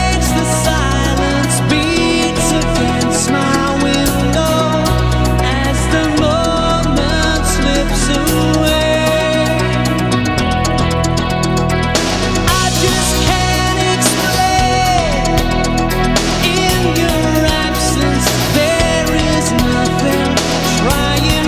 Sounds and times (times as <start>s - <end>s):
Music: 0.0s - 21.4s.